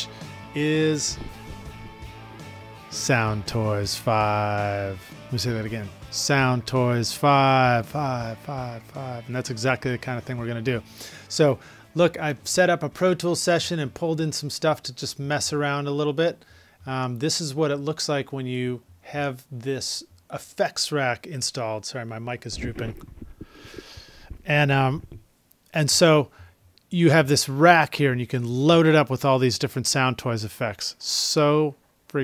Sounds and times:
Speech: 0.0 - 1.3, 2.9 - 23.0, 24.4 - 25.1, 25.7 - 26.3, 26.9 - 32.2
Music: 0.0 - 14.0.

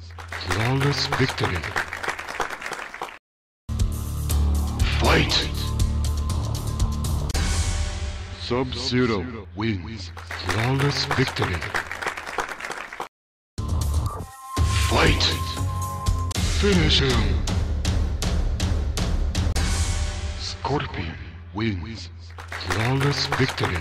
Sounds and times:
Speech: 0.4 - 1.8, 4.8 - 5.8, 8.4 - 11.8, 14.8 - 15.7, 16.6 - 17.5, 20.4 - 23.8
Music: 3.7 - 11.4, 13.6 - 21.6, 22.2 - 23.8.

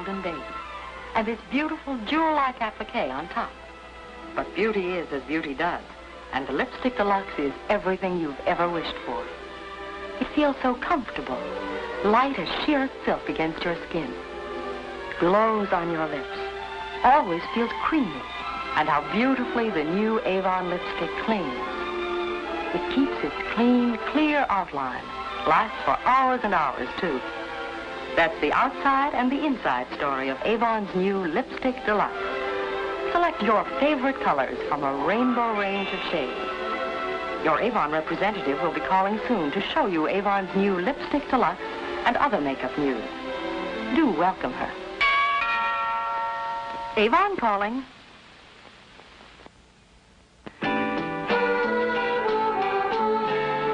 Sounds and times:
Speech: 0.0 - 0.5, 1.2 - 3.5, 4.4 - 9.3, 10.2 - 14.2, 15.2 - 18.2, 18.8 - 21.6, 22.7 - 27.2, 28.2 - 32.2, 33.1 - 36.4, 37.4 - 43.1, 43.8 - 44.8, 47.0 - 47.9
Music: 0.0 - 53.7.

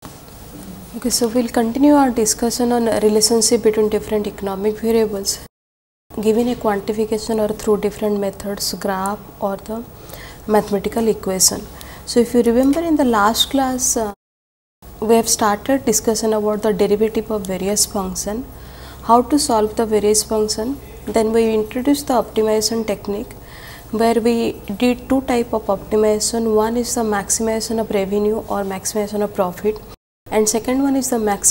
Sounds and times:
Speech: 0.6 - 5.5, 6.2 - 9.9, 10.5 - 14.2, 15.0 - 18.5, 19.1 - 31.5.

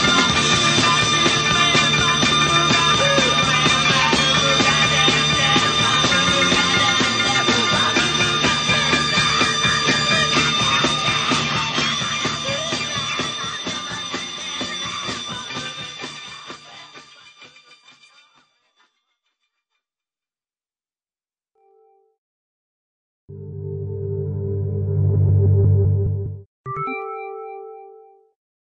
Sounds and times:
Musical instrument: 23.4 - 28.3.

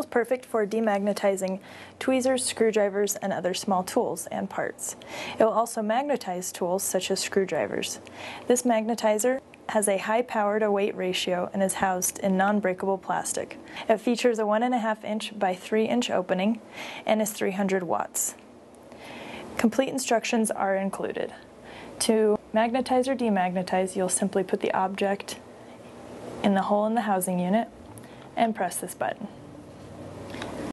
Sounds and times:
Speech: 0.0 - 18.4, 19.6 - 25.4, 26.4 - 27.7, 28.4 - 29.4.

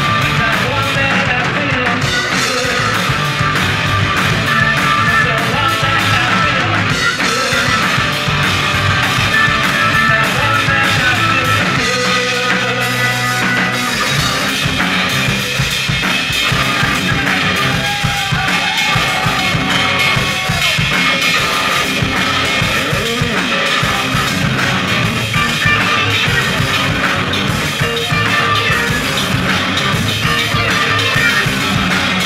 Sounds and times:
Drum kit: 0.0 - 32.2
Guitar: 0.0 - 32.2
Rock music: 0.0 - 32.2.

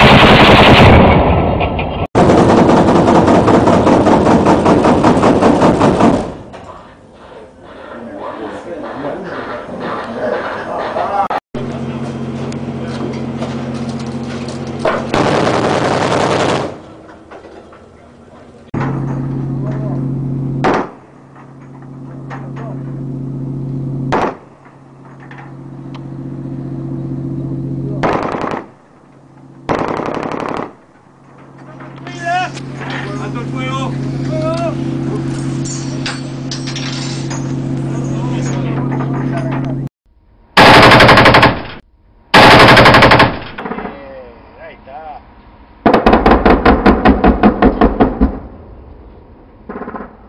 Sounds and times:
Machine gun: 0.0 - 1.4, 2.2 - 6.4, 15.1 - 16.8, 28.0 - 28.8, 29.7 - 30.8, 40.6 - 41.8, 42.4 - 43.8, 45.9 - 48.4.

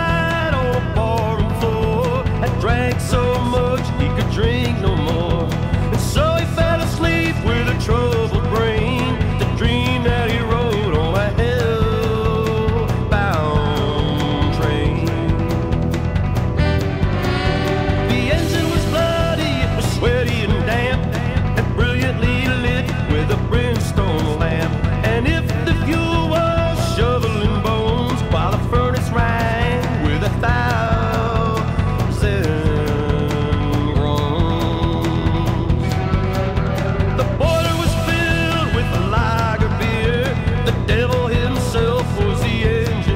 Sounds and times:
Music: 0.0 - 43.1.

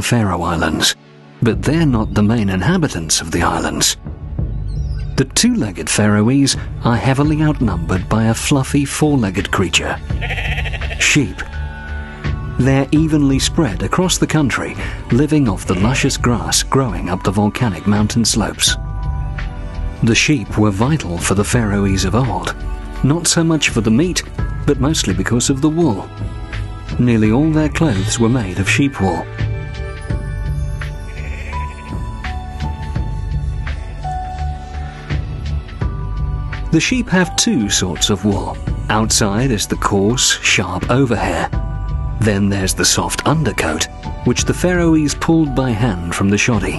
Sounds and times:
Speech: 0.0 - 4.0, 5.2 - 10.0, 11.0 - 11.5, 12.6 - 18.8, 20.0 - 26.1, 26.9 - 29.3, 36.7 - 41.6, 42.2 - 46.7
Music: 0.0 - 46.7
Bleat: 10.1 - 11.0, 31.0 - 31.9.

